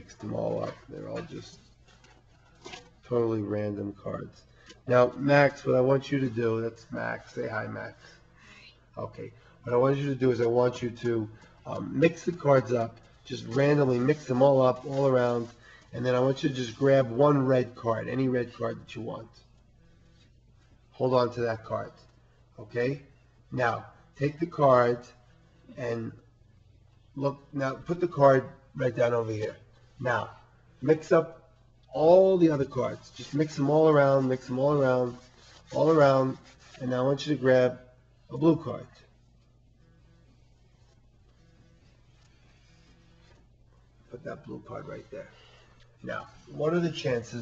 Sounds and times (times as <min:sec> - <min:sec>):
Speech: 0:00.0 - 0:01.6, 0:03.0 - 0:08.2, 0:09.0 - 0:19.5, 0:21.0 - 0:26.2, 0:27.2 - 0:39.1, 0:44.1 - 0:45.4, 0:46.0 - 0:47.4.